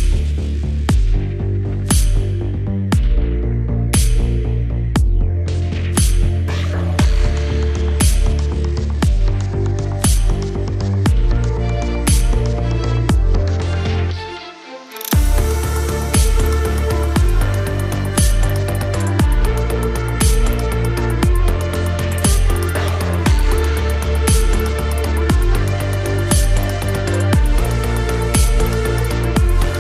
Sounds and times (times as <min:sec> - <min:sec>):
Music: 0:00.0 - 0:29.8.